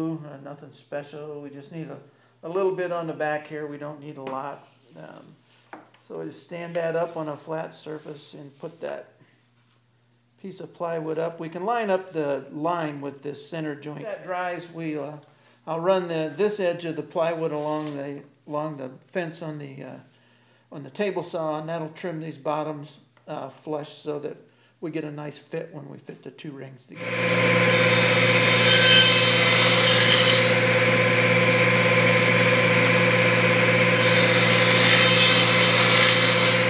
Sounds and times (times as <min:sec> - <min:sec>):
Speech: 0:00.0 - 0:05.4, 0:06.0 - 0:09.2, 0:10.4 - 0:20.1, 0:20.7 - 0:27.0.